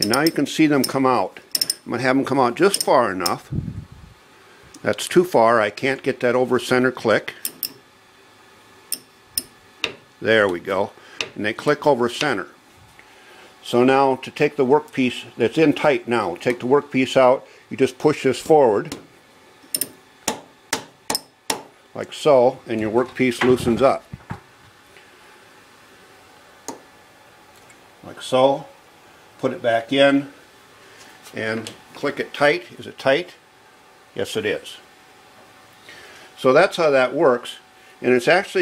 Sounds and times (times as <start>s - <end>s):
Tools: 0.0s - 1.8s, 2.7s - 3.4s, 7.4s - 7.8s, 8.9s - 10.0s, 19.7s - 20.0s
Speech: 0.0s - 3.5s, 4.8s - 7.4s, 10.2s - 12.6s, 13.6s - 19.0s, 22.0s - 24.1s, 28.0s - 28.8s, 29.4s - 30.4s, 31.3s - 33.4s, 34.2s - 34.9s, 36.4s - 38.6s.